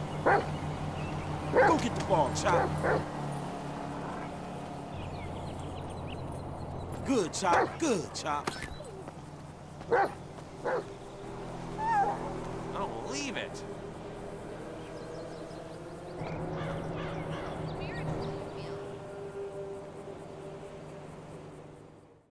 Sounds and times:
Speech: 1.6 - 2.7, 7.0 - 8.6, 12.8 - 13.6.

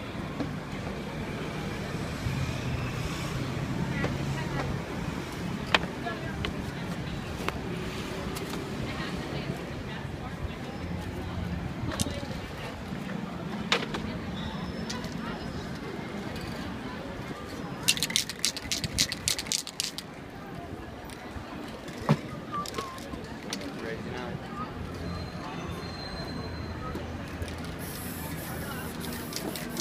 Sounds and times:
Speech: 3.7 - 18.0, 20.0 - 29.8
Spray: 27.6 - 29.8.

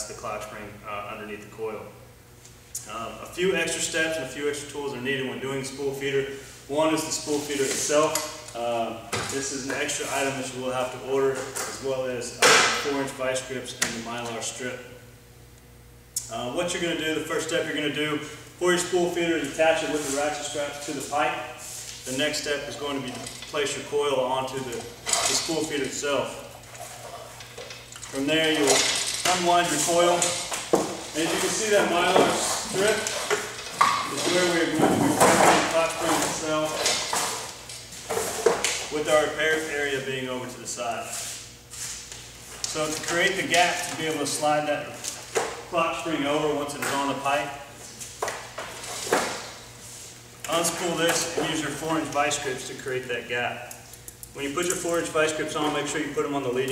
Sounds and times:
Speech: 0.0 - 2.0, 2.8 - 15.0, 16.2 - 26.5, 28.1 - 30.4, 31.2 - 33.2, 34.1 - 36.9, 38.9 - 41.2, 42.7 - 45.0, 45.7 - 47.7, 50.5 - 53.7, 54.4 - 56.7.

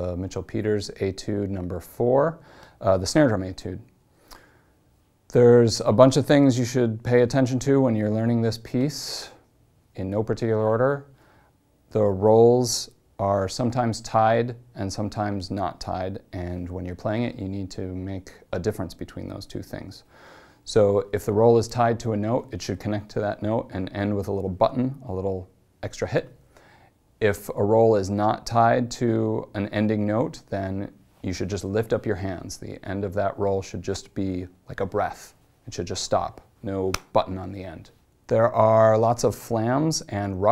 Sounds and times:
Speech: 0.0 - 3.9, 5.3 - 11.2, 11.9 - 26.4, 27.2 - 40.5.

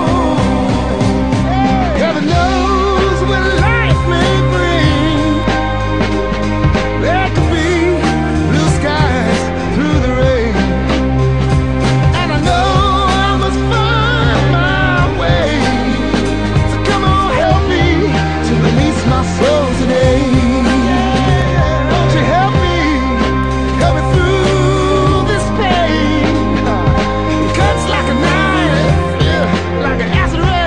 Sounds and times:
Psychedelic rock: 0.0 - 30.6.

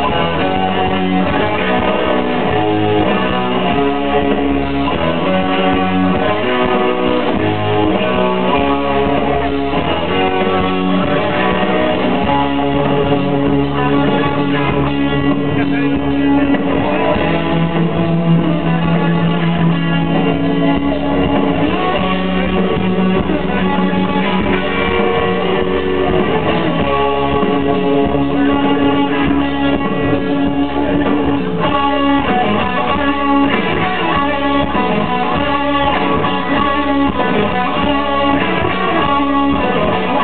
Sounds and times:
Music: 0.0 - 40.2.

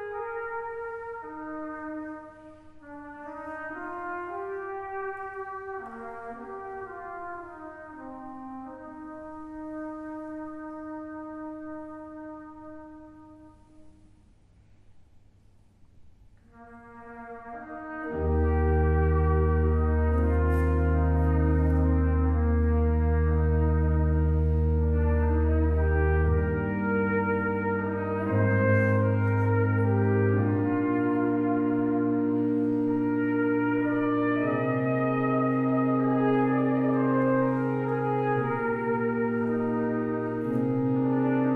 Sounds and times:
Cello: 16.4 - 41.5
Double bass: 17.8 - 41.5.

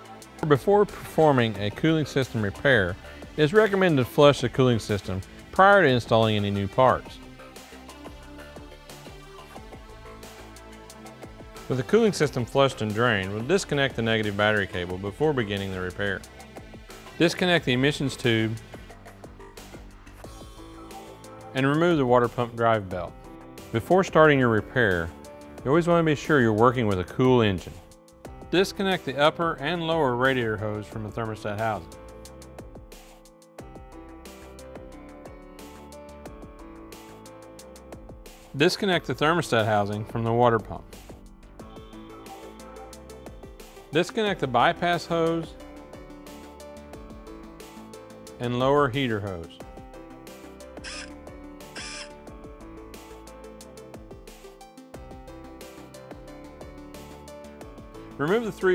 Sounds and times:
Music: 0.0 - 58.7
Speech: 0.4 - 7.2, 11.7 - 16.2, 17.2 - 18.6, 21.5 - 23.1, 23.7 - 27.8, 28.5 - 31.9, 38.6 - 40.9, 43.9 - 45.6, 48.4 - 49.6, 58.2 - 58.7.

